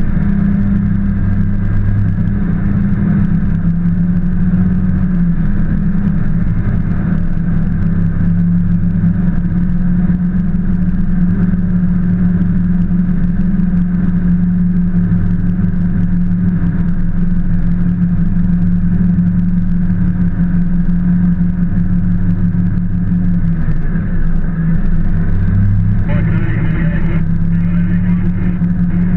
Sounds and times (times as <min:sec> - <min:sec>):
Vehicle: 0:00.0 - 0:29.1.